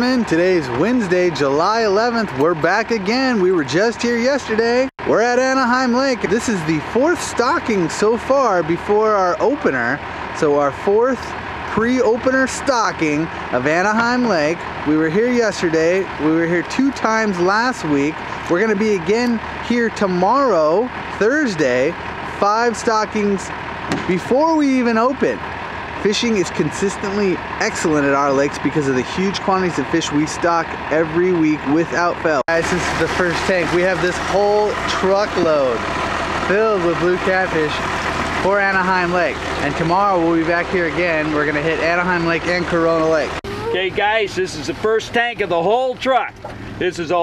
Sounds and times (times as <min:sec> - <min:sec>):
Speech: 0:00.0 - 0:23.5, 0:24.1 - 0:25.4, 0:26.0 - 0:35.8, 0:36.5 - 0:47.2
Truck: 0:00.0 - 0:47.2.